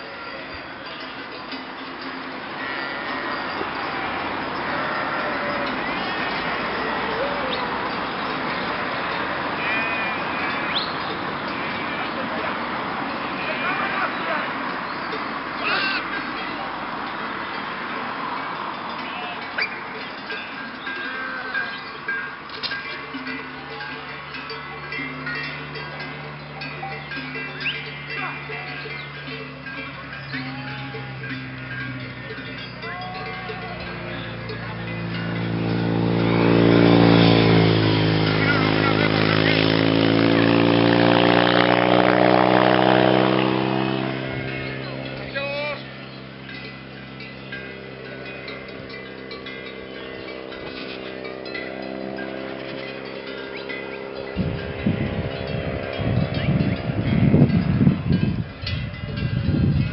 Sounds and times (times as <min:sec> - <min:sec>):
Motorcycle: 0:00.0 - 0:59.9
Sheep: 0:02.4 - 0:17.0, 0:29.9 - 0:34.9.